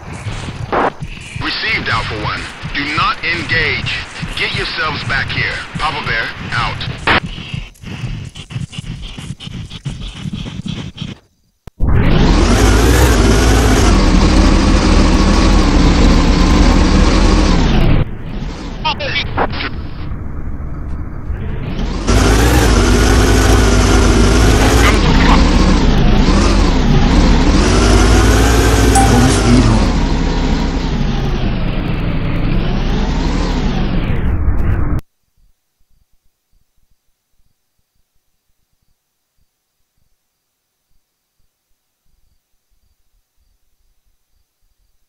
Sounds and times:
Outside, rural or natural: 0.0 - 45.0
Speech: 1.4 - 6.9, 29.1 - 29.9
Vehicle: 11.8 - 35.0.

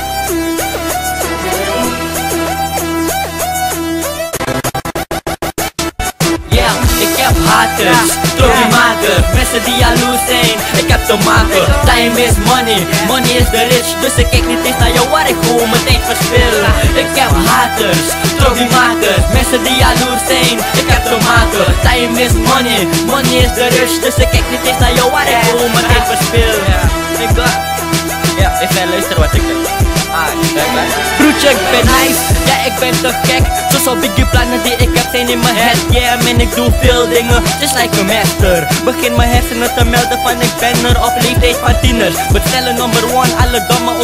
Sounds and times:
Dance music: 0.0 - 44.0.

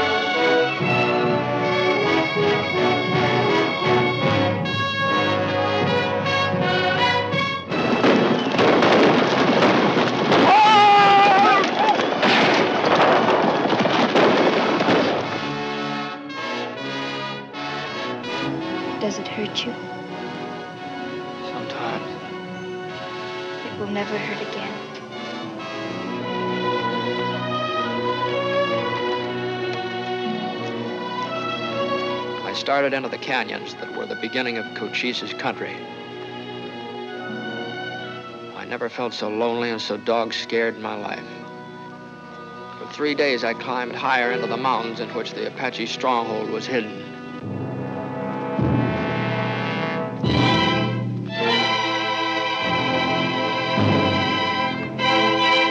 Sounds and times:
Music: 0.0 - 55.7
Speech: 19.0 - 19.8, 23.7 - 24.9, 32.5 - 35.8, 38.6 - 41.4, 42.8 - 46.9.

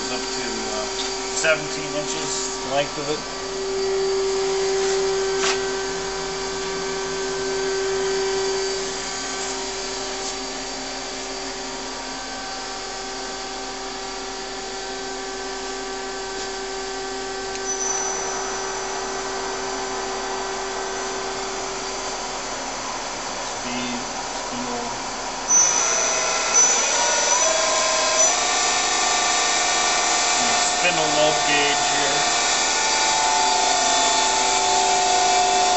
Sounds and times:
Speech: 0.0 - 3.3, 23.6 - 25.0, 30.4 - 32.3.

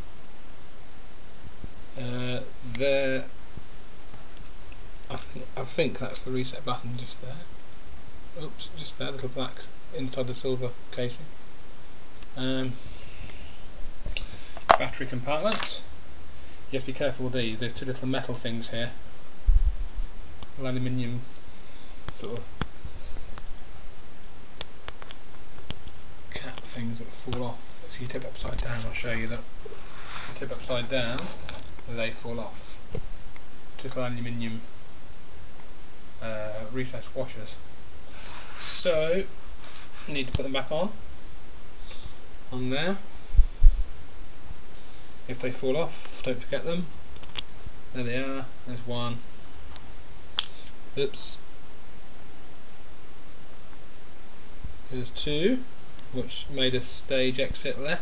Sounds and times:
Speech: 2.0 - 3.4, 5.1 - 7.5, 8.4 - 11.3, 12.2 - 12.8, 14.7 - 15.9, 16.7 - 19.0, 20.6 - 21.3, 22.1 - 22.5, 26.3 - 29.5, 30.4 - 32.8, 33.8 - 34.7, 36.2 - 37.6, 38.6 - 39.4, 40.1 - 41.0, 42.5 - 43.1, 45.3 - 46.9, 47.9 - 49.3, 50.9 - 51.4, 54.8 - 58.0.

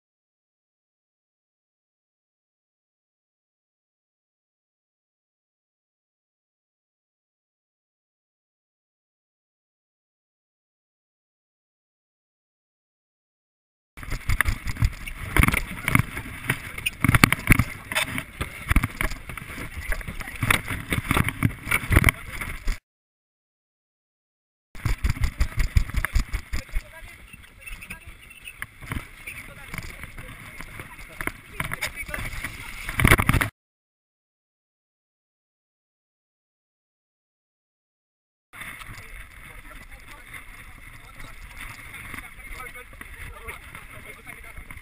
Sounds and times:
Outside, rural or natural: 14.0 - 22.8, 24.7 - 33.6, 38.5 - 44.8
Speech: 19.6 - 20.7, 21.9 - 22.8, 25.3 - 28.4, 29.2 - 33.5, 38.8 - 44.8.

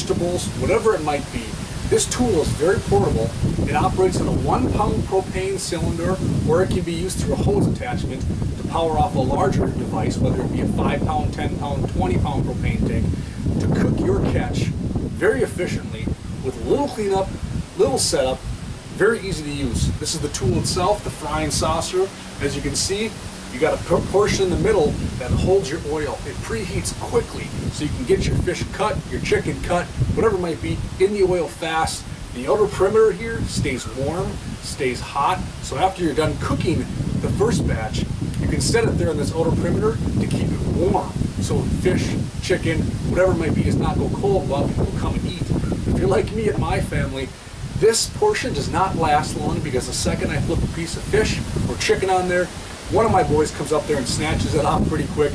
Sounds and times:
Speech: 0.0 - 18.4, 19.0 - 55.3.

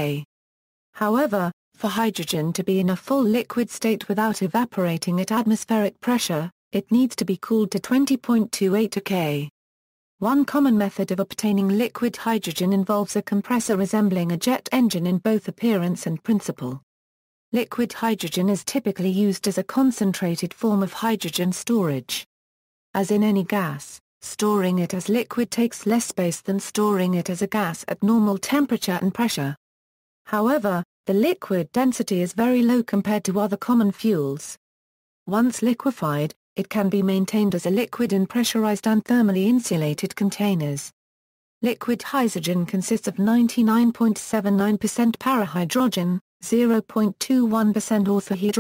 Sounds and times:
Speech: 0.0 - 0.3, 1.0 - 9.5, 10.2 - 16.8, 17.6 - 22.3, 23.0 - 29.6, 30.3 - 34.6, 35.3 - 40.9, 41.6 - 48.6.

